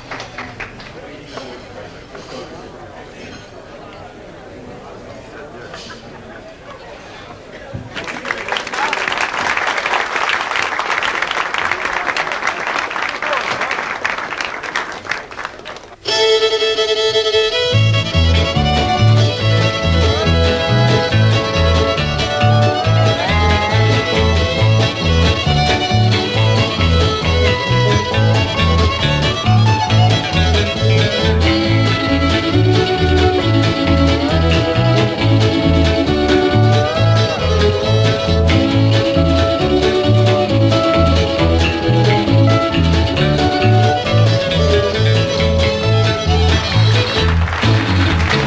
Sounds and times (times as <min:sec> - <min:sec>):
Violin, fiddle: 0:16.1 - 0:47.4.